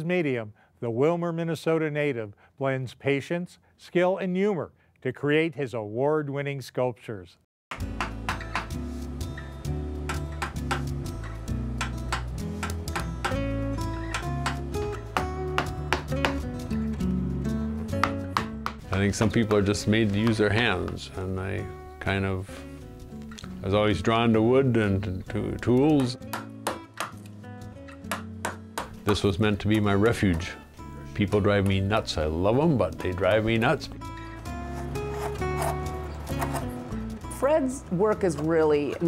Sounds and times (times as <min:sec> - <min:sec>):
Speech: 0:00.0 - 0:07.4, 0:18.9 - 0:22.5, 0:23.6 - 0:26.2, 0:29.1 - 0:30.6, 0:31.2 - 0:33.9, 0:37.4 - 0:39.0
Music: 0:07.7 - 0:39.0.